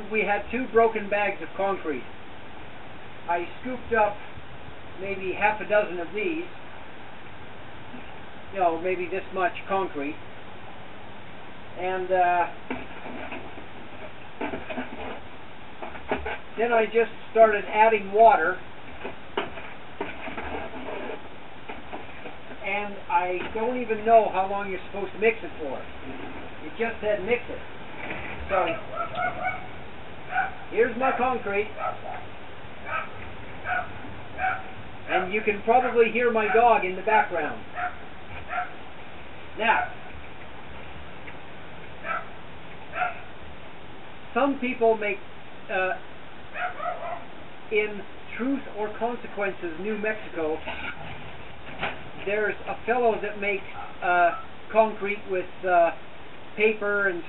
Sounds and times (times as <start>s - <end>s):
Speech: 0.0s - 2.1s, 3.3s - 4.2s, 5.0s - 6.5s, 8.6s - 10.2s, 11.8s - 12.6s, 16.6s - 18.6s, 22.6s - 25.9s, 26.6s - 27.6s, 28.5s - 28.8s, 30.7s - 31.7s, 35.1s - 37.7s, 39.6s - 39.8s, 44.4s - 46.0s, 47.7s - 50.7s, 52.2s - 56.0s, 56.6s - 57.2s.